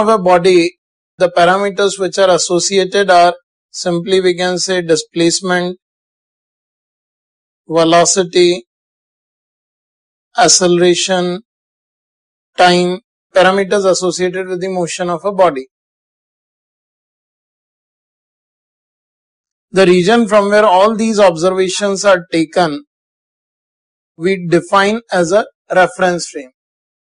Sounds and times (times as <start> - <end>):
Speech: 0.0 - 5.8, 7.7 - 8.7, 10.4 - 11.5, 12.6 - 15.7, 19.8 - 22.9, 24.2 - 26.6.